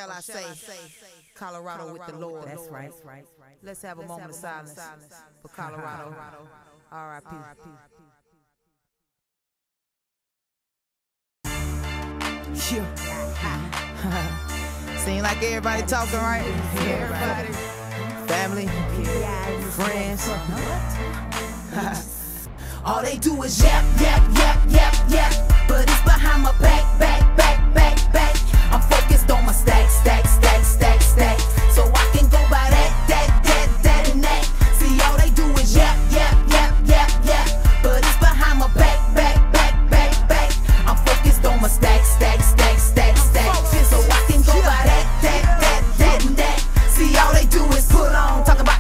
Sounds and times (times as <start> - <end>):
Speech: 0.0 - 0.8, 1.4 - 7.7, 15.0 - 17.6
Music: 11.5 - 48.8.